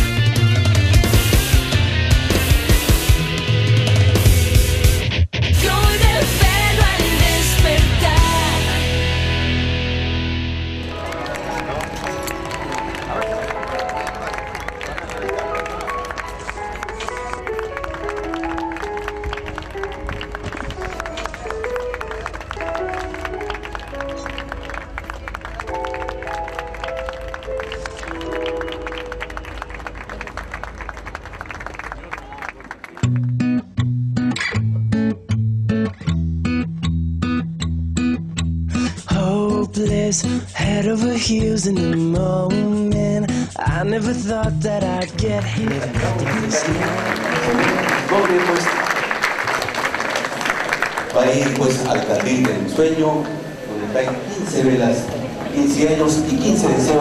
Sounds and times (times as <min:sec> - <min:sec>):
Music: 0:00.0 - 0:31.2, 0:33.0 - 0:48.3.